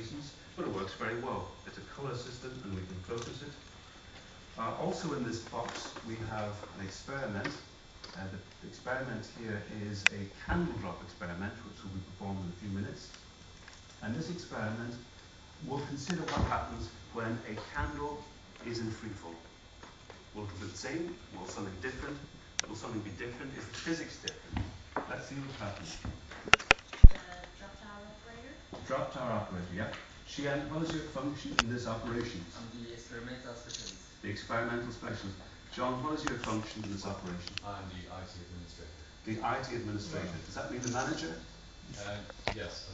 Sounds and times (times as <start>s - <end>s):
Speech: 0.0s - 3.6s, 4.6s - 13.2s, 14.0s - 19.5s, 20.4s - 24.4s, 25.0s - 26.0s, 27.1s - 42.9s.